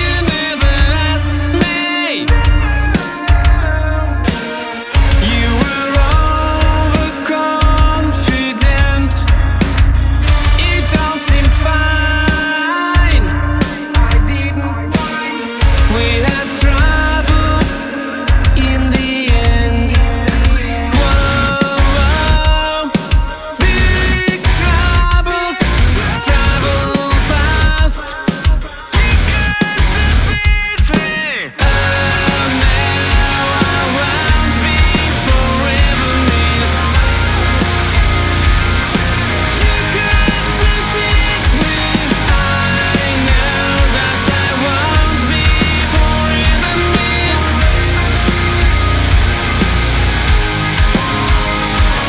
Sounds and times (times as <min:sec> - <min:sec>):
Exciting music: 0:00.0 - 0:52.0
Heavy metal: 0:00.0 - 0:52.0
Pop music: 0:00.0 - 0:52.0
Rock and roll: 0:00.0 - 0:52.0.